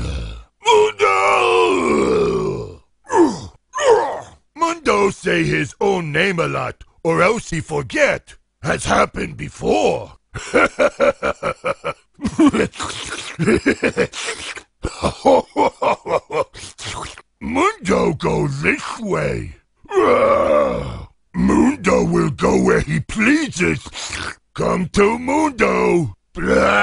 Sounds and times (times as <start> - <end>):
Speech: 4.6 - 10.2, 16.7 - 26.8.